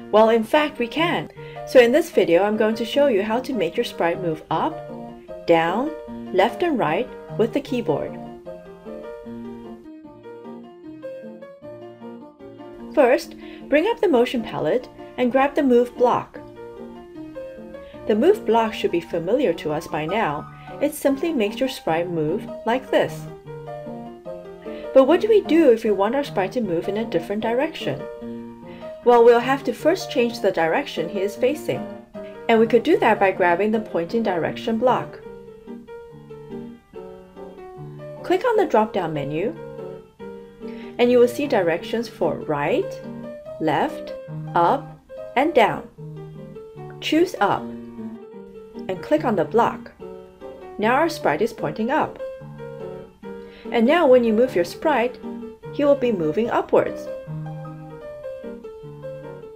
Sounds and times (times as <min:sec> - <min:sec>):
Music: 0:00.0 - 0:59.5
Speech: 0:00.2 - 0:04.8, 0:05.5 - 0:08.2, 0:13.0 - 0:16.4, 0:18.1 - 0:23.3, 0:25.0 - 0:28.0, 0:29.1 - 0:31.8, 0:32.5 - 0:35.2, 0:38.2 - 0:39.6, 0:41.0 - 0:43.0, 0:43.6 - 0:44.8, 0:45.4 - 0:45.9, 0:47.0 - 0:47.7, 0:48.9 - 0:49.9, 0:50.8 - 0:52.2, 0:53.7 - 0:55.2, 0:55.8 - 0:57.1.